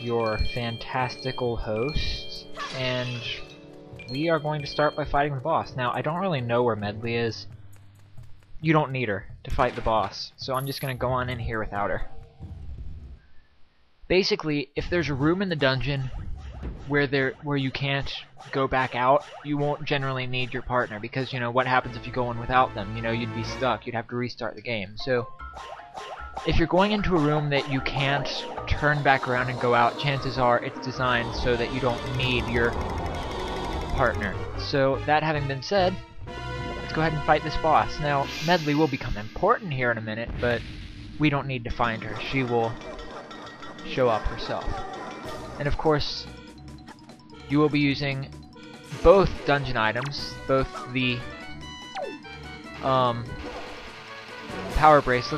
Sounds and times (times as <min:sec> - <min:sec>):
Speech: 0:00.0 - 0:03.4, 0:04.1 - 0:07.5, 0:08.6 - 0:12.1, 0:14.1 - 0:16.1, 0:16.9 - 0:25.3, 0:26.5 - 0:32.8, 0:34.0 - 0:36.0, 0:36.9 - 0:40.6, 0:41.2 - 0:42.8, 0:43.9 - 0:44.7, 0:45.6 - 0:46.3, 0:47.5 - 0:48.3, 0:49.0 - 0:51.3, 0:52.8 - 0:53.4, 0:54.6 - 0:55.3
Music: 0:00.0 - 0:13.2, 0:15.0 - 0:55.3.